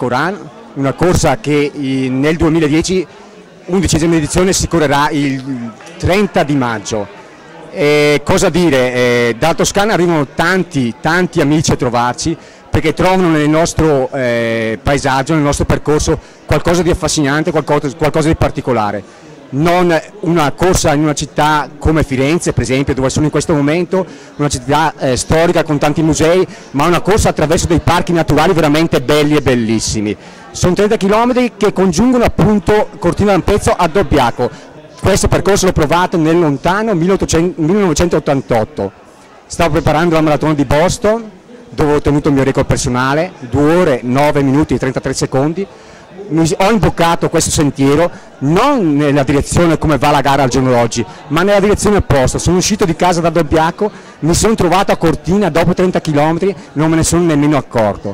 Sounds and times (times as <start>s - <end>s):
Speech: 0.0s - 58.1s.